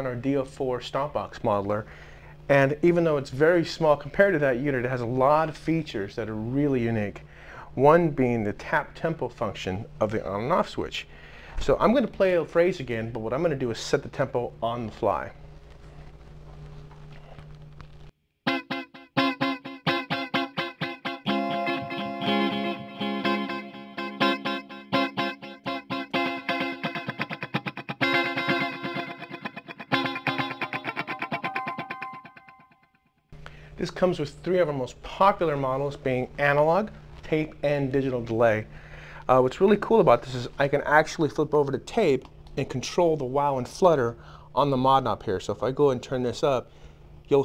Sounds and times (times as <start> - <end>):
Speech: 0.0 - 1.9, 2.5 - 7.2, 7.8 - 15.4, 33.8 - 38.7, 39.3 - 46.7
Music: 18.4 - 33.3.